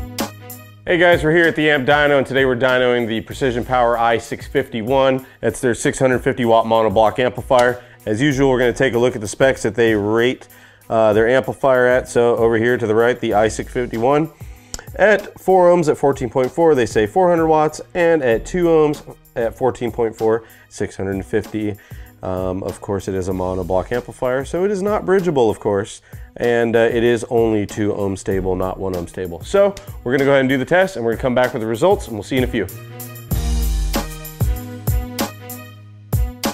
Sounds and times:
Music: 0:00.0 - 0:36.5
Speech: 0:00.9 - 0:14.4, 0:15.0 - 0:32.7.

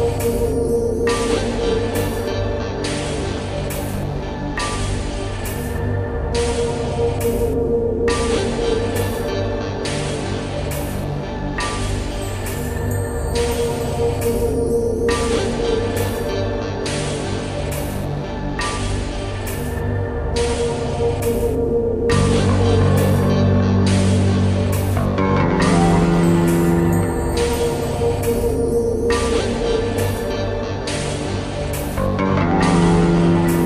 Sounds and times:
Music: 0:00.0 - 0:33.6.

